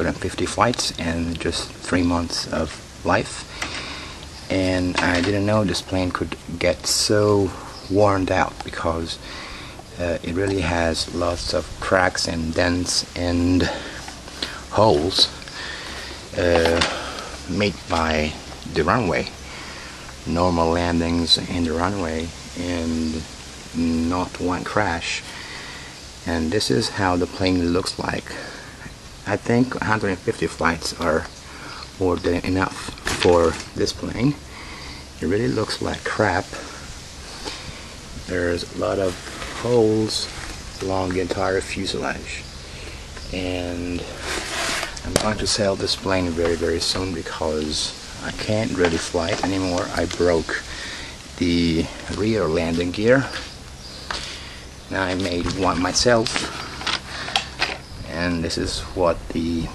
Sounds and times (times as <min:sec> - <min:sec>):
Speech: 0:00.0 - 0:03.5, 0:04.4 - 0:09.2, 0:09.9 - 0:15.5, 0:16.3 - 0:19.4, 0:20.2 - 0:25.3, 0:26.2 - 0:28.6, 0:29.2 - 0:34.5, 0:35.2 - 0:36.8, 0:38.2 - 0:42.5, 0:43.3 - 0:50.8, 0:51.4 - 0:53.6, 0:54.9 - 0:56.7, 0:58.0 - 0:59.7.